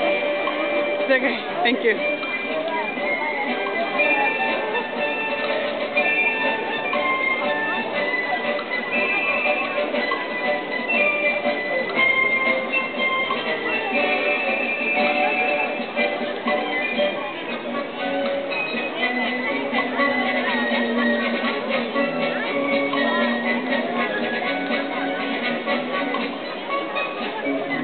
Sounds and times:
Music: 0.0 - 27.8
Speech: 0.0 - 27.8.

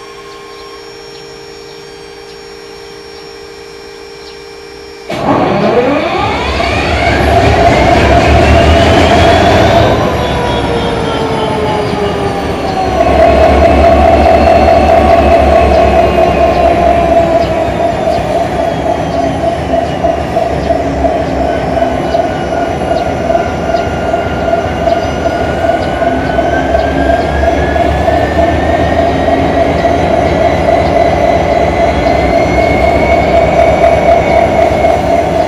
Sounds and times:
Heavy engine (low frequency): 0.0 - 35.4.

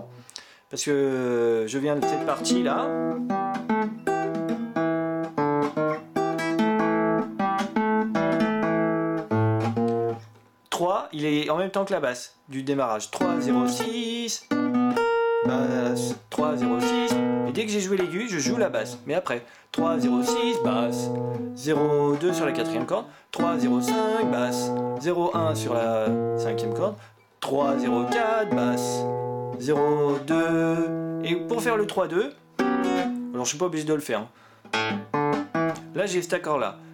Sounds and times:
Speech: 0.0 - 3.0, 10.7 - 14.5, 15.5 - 29.0, 29.6 - 32.4, 33.3 - 34.4, 35.9 - 36.8
Acoustic guitar: 1.6 - 10.5, 13.1 - 36.9.

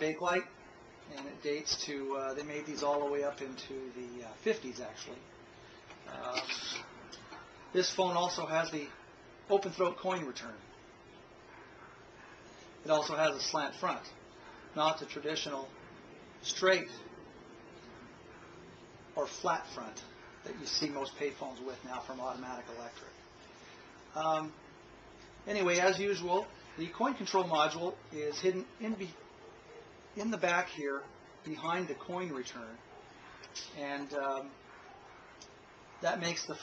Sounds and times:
Speech: 0.0 - 0.5, 1.1 - 5.3, 6.1 - 6.8, 7.7 - 10.6, 12.8 - 14.2, 14.8 - 15.7, 16.4 - 17.1, 19.2 - 23.2, 24.1 - 24.6, 25.5 - 29.2, 30.2 - 32.8, 33.7 - 34.6, 36.0 - 36.6.

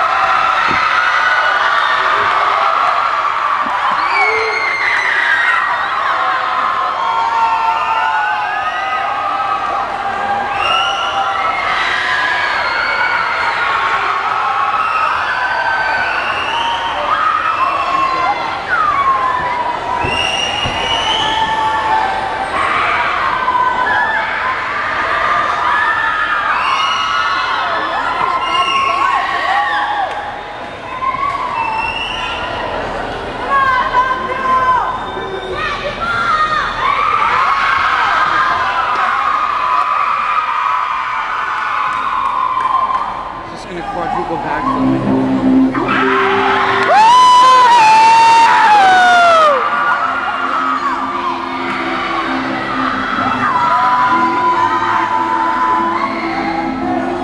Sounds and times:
Cheering: 0.0 - 57.2
Inside, large room or hall: 0.0 - 57.2
Inside, public space: 0.0 - 57.2
Speech: 43.5 - 44.9
Music: 44.6 - 57.2.

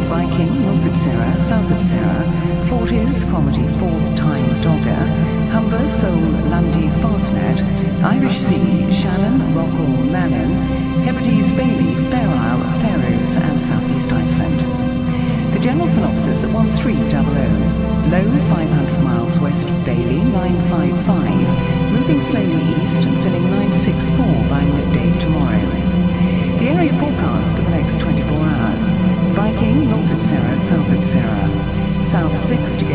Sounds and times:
Music: 0.0 - 32.9
Speech: 0.0 - 32.9.

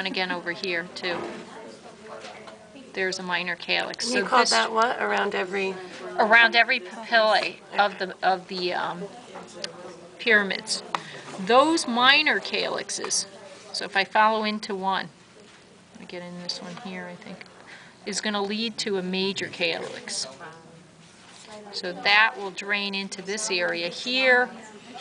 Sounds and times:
Speech: 0.0 - 15.1, 16.0 - 17.5, 18.1 - 20.8, 21.4 - 25.0.

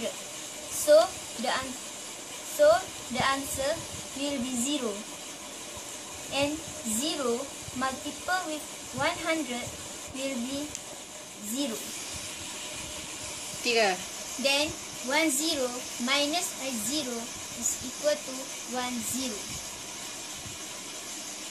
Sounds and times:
Inside, small room: 0.0 - 21.5
Speech: 6.4 - 10.7, 13.7 - 19.5.

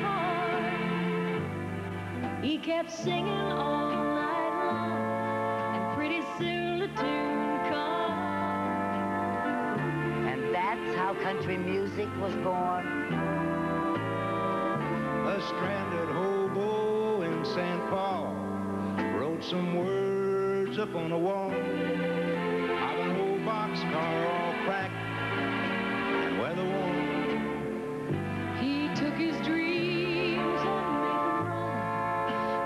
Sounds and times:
Music: 0.0 - 32.6
Speech: 10.5 - 12.9.

